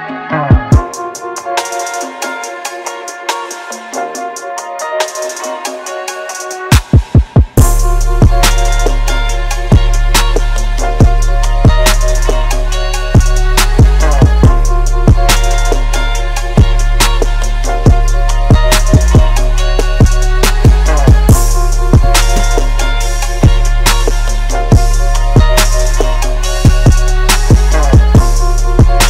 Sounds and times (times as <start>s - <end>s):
Music: 0.0s - 29.0s.